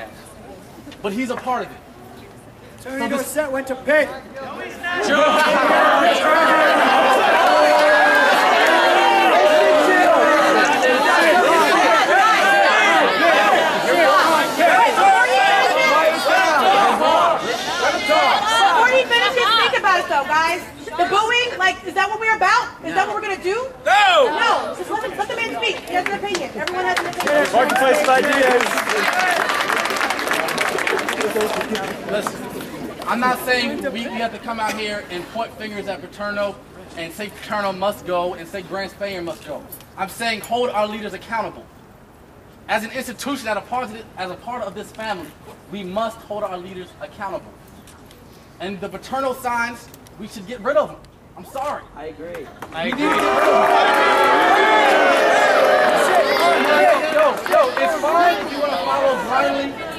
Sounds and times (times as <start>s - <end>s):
Chatter: 0.0s - 37.4s, 51.4s - 59.9s.